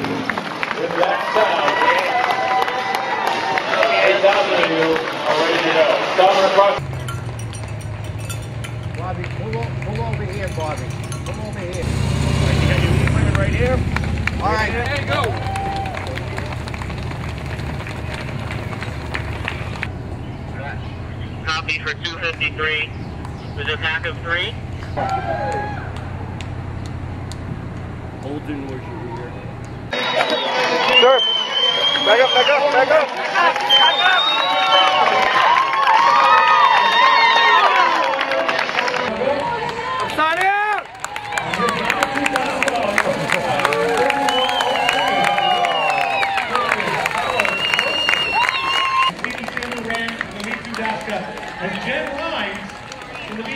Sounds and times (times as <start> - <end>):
Run: 0.0 - 11.7, 13.9 - 20.0, 24.8 - 53.5
Outside, urban or manmade: 0.0 - 53.5.